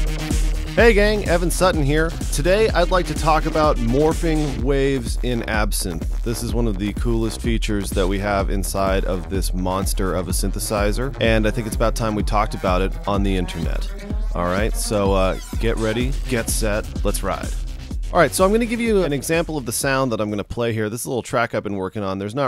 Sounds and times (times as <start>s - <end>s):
Music: 0.0s - 20.5s
Speech: 0.8s - 17.6s, 18.2s - 22.4s.